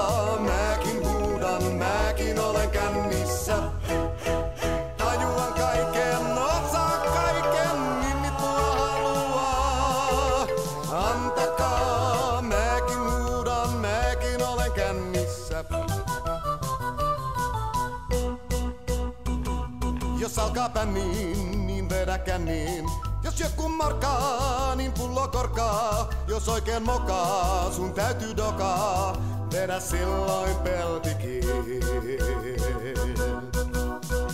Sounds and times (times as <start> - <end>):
Music: 0.0 - 34.3.